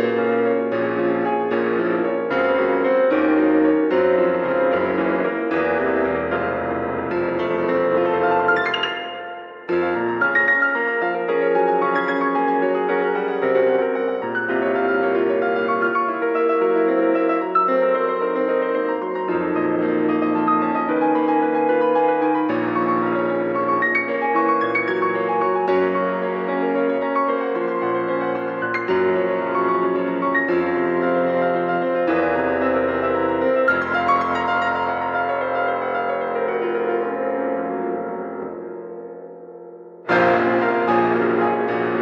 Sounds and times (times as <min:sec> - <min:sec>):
Music: 0:00.0 - 0:42.0.